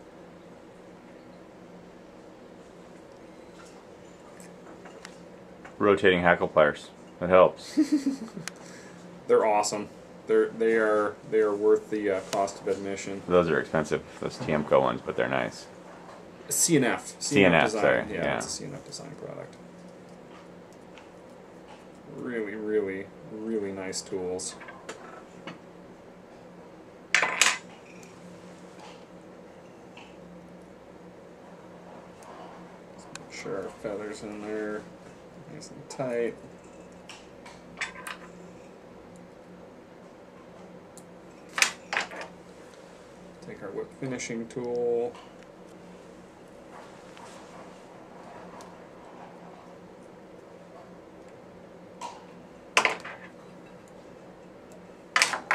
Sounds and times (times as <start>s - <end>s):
Speech: 5.8s - 7.6s, 9.3s - 15.7s, 16.5s - 19.5s, 22.1s - 24.6s, 33.0s - 36.4s, 43.4s - 45.2s.